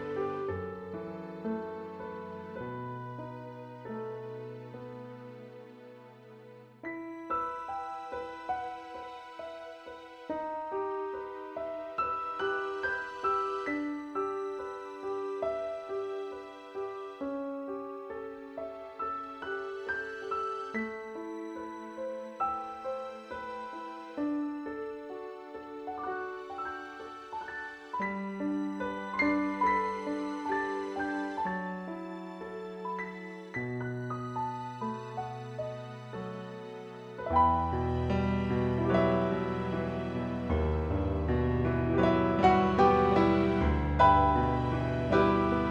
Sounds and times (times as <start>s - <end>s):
Lullaby: 0.0s - 37.4s
Piano: 0.0s - 45.7s.